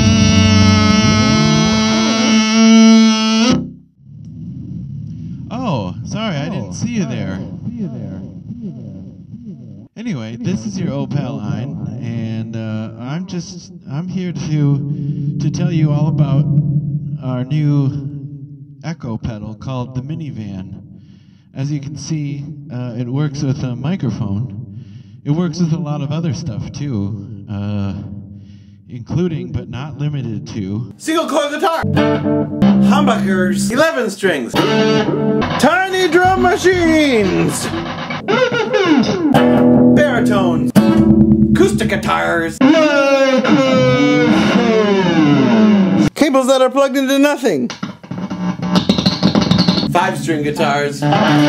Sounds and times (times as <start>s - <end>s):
Speech: 5.5s - 9.1s, 10.0s - 16.5s, 17.2s - 18.1s, 18.8s - 20.8s, 21.6s - 24.6s, 25.3s - 28.1s, 28.9s - 31.9s, 32.8s - 34.6s, 35.6s - 39.2s, 40.0s - 44.6s, 46.0s - 47.7s, 49.9s - 51.4s
Echo: 10.4s - 19.3s, 19.9s - 25.3s.